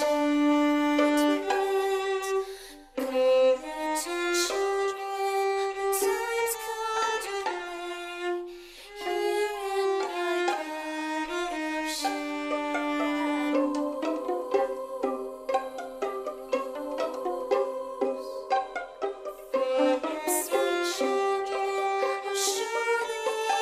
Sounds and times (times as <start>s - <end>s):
Violin, fiddle: 0.0s - 23.6s.